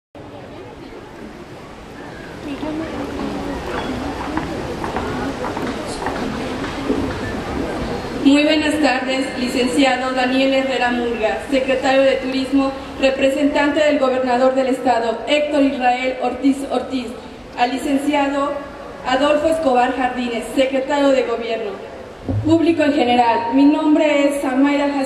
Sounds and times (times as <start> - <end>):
Female speech, woman speaking: 2.4 - 3.3, 8.2 - 25.0
Narration, monologue: 8.2 - 25.0.